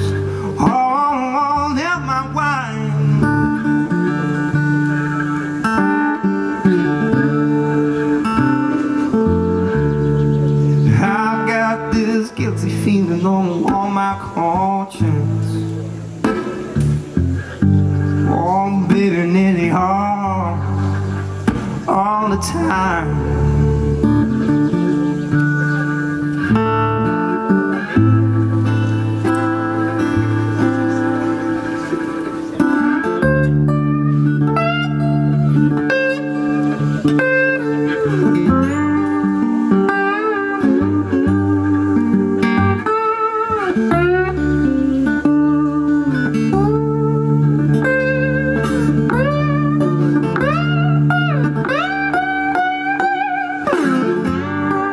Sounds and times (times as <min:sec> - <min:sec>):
Steel guitar, slide guitar: 0:00.0 - 0:54.9.